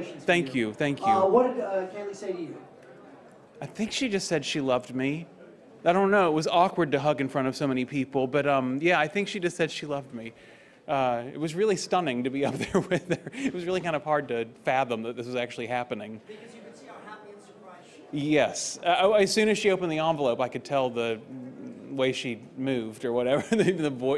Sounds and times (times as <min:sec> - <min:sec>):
Speech: 0:00.0 - 0:02.7, 0:03.6 - 0:05.3, 0:16.9 - 0:24.1.